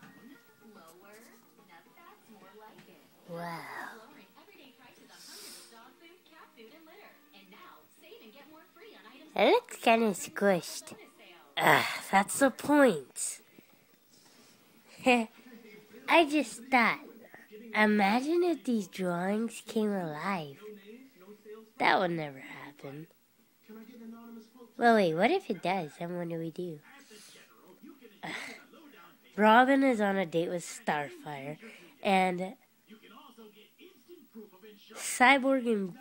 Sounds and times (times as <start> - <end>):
Speech: 0.7 - 13.4, 23.7 - 36.0.